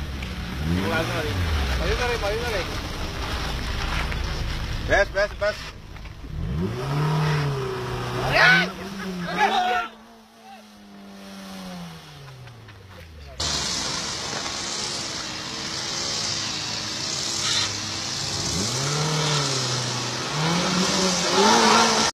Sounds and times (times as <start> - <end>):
Skidding: 0.0 - 22.1
Speech: 0.8 - 2.8, 12.7 - 13.4.